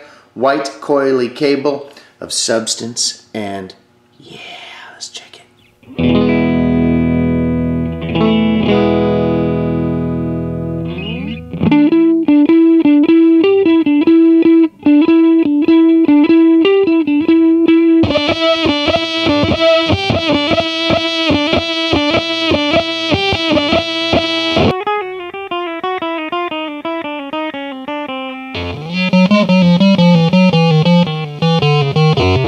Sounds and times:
Distortion: 5.5 - 32.4
Music: 5.8 - 32.4.

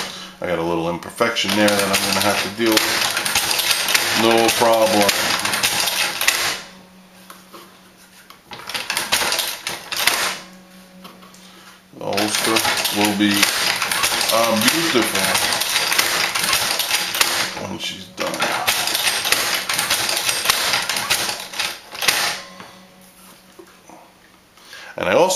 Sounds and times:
Speech: 0.4 - 2.9, 4.2 - 5.3, 12.0 - 13.5, 14.3 - 15.5, 17.6 - 18.4, 25.0 - 25.3
Sewing machine: 1.4 - 6.7, 8.5 - 10.4, 12.1 - 22.5.

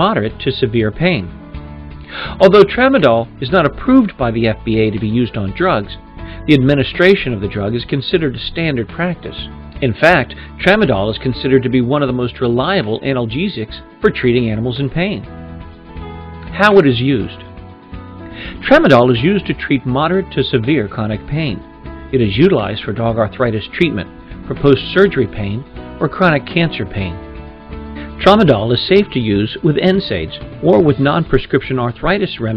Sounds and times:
Speech: 0.0 - 1.4, 2.4 - 15.3, 16.5 - 17.5, 18.6 - 27.2, 28.2 - 32.5
Music: 0.0 - 32.5.

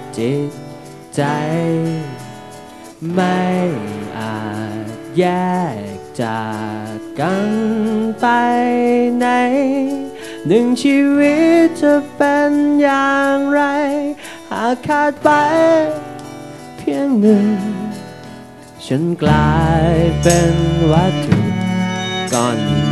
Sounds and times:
Music: 0.0 - 22.9.

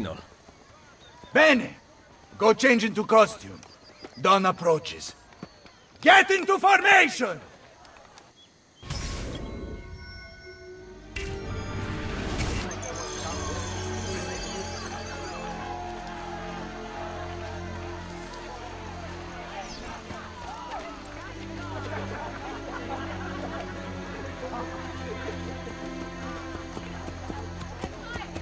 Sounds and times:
Music: 8.9 - 28.4.

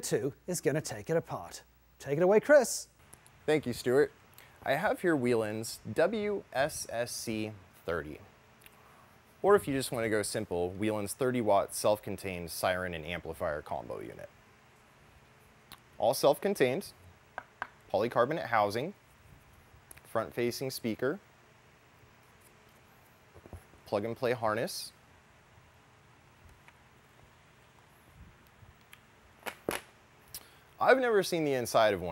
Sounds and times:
Speech: 0.0 - 2.9, 3.5 - 8.3, 9.4 - 14.3, 16.0 - 17.0, 17.9 - 19.0, 20.1 - 21.2, 23.9 - 25.0, 30.8 - 32.1.

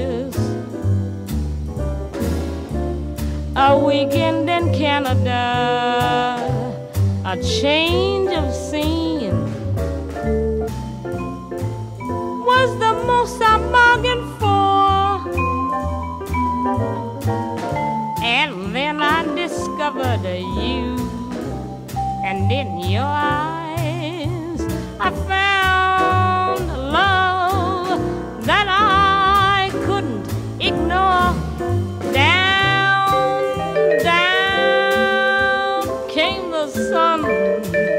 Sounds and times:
Music: 0.0 - 37.9.

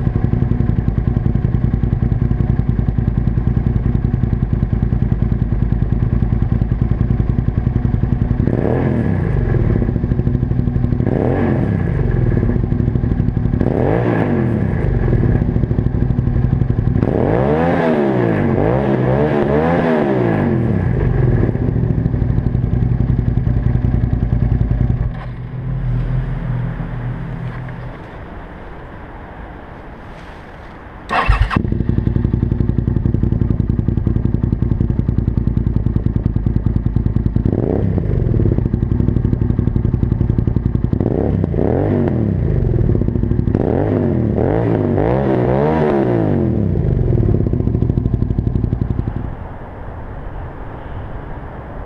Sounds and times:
Clatter: 21.0 - 26.2.

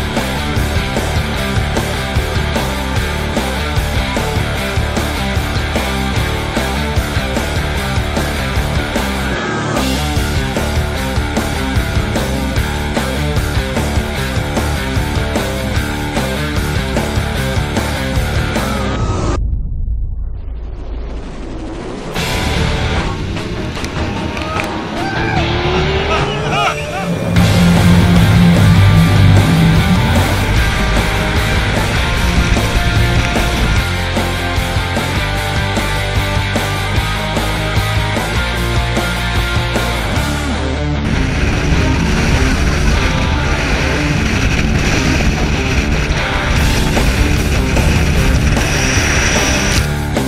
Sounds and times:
Music: 0.0 - 19.6, 20.4 - 50.2.

